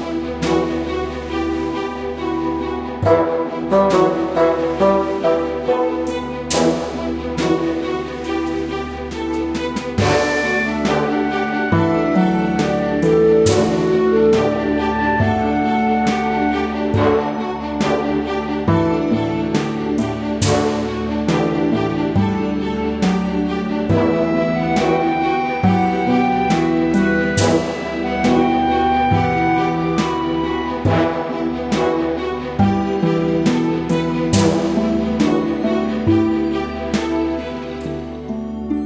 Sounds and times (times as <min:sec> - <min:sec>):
Music: 0:00.0 - 0:38.8.